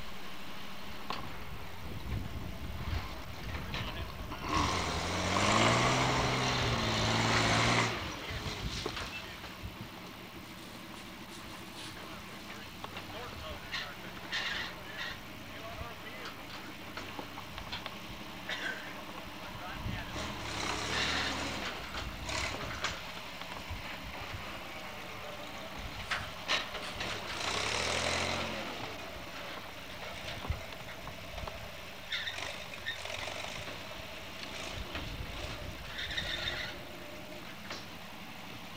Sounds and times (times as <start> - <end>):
Truck: 0.0 - 38.7.